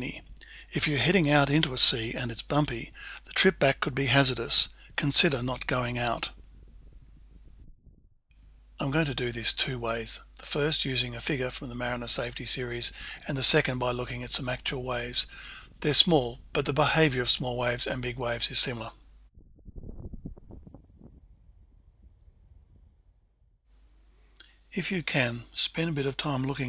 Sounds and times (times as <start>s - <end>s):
Speech: 0.0s - 6.4s, 8.8s - 19.0s, 24.8s - 26.6s.